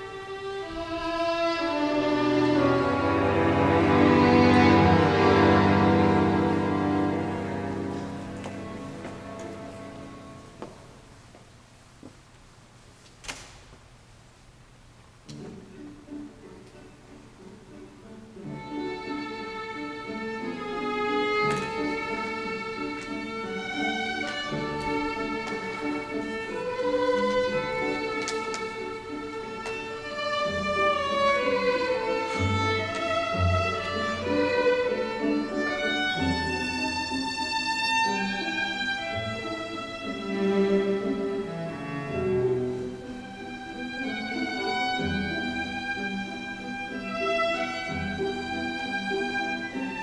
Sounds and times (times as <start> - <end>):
String section: 0.0 - 11.3, 15.2 - 50.0.